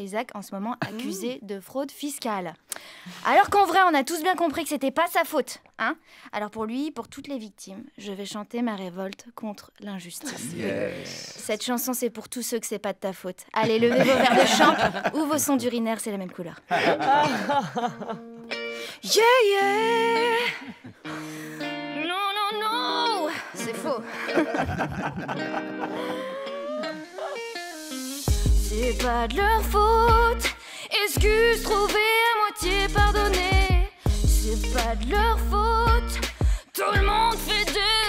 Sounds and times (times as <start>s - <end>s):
Speech: 0.0s - 17.4s.